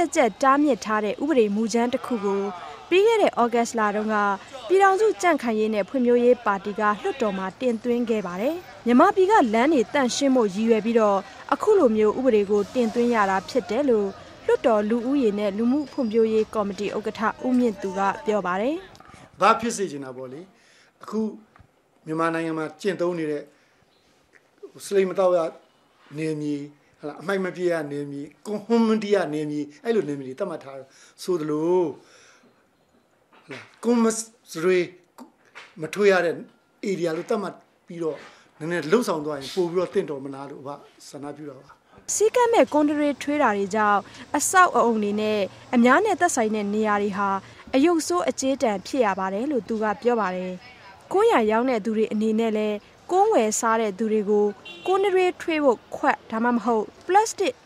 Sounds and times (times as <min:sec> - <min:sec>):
Speech: 0:00.0 - 0:21.4, 0:35.8 - 0:57.6.